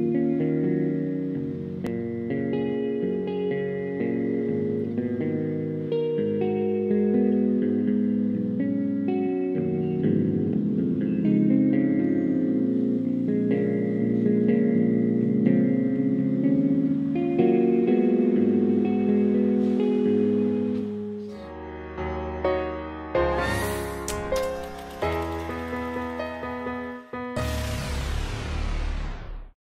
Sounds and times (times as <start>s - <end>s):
Guitar: 0.0s - 29.5s.